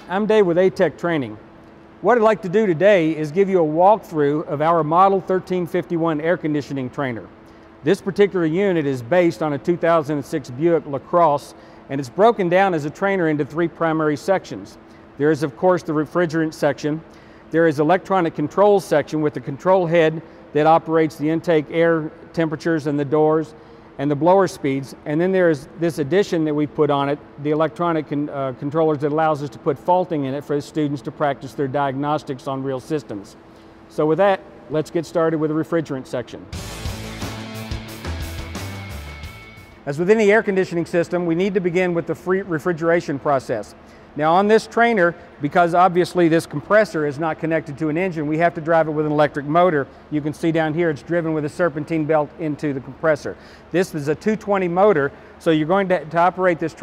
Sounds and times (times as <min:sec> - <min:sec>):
Speech: 0:00.0 - 0:01.4, 0:02.0 - 0:36.6, 0:39.9 - 0:56.8.